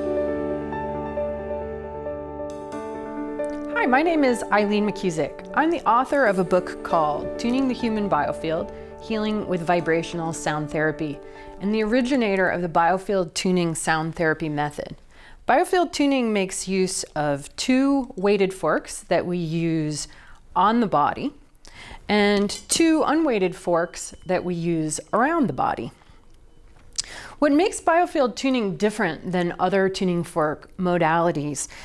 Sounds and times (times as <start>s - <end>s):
Speech: 3.8s - 21.4s, 22.1s - 26.0s, 27.4s - 31.7s.